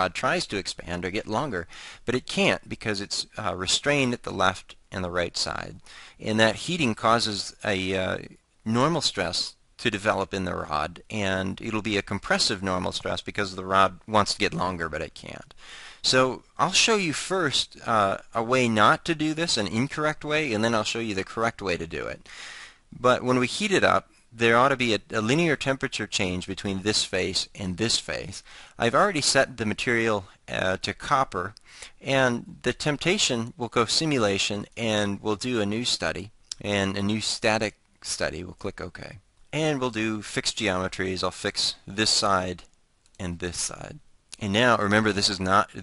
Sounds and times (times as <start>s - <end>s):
Speech: 0.0s - 22.2s, 22.9s - 45.8s.